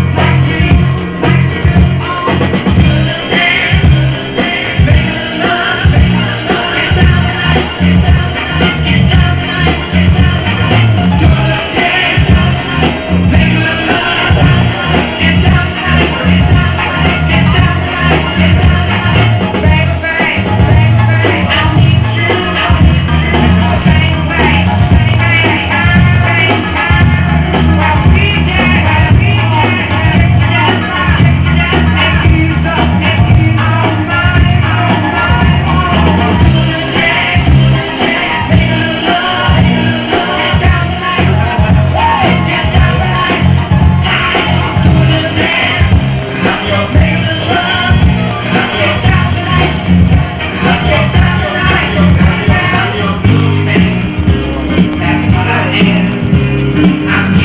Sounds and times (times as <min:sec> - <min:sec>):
Disco: 0:00.0 - 0:57.4.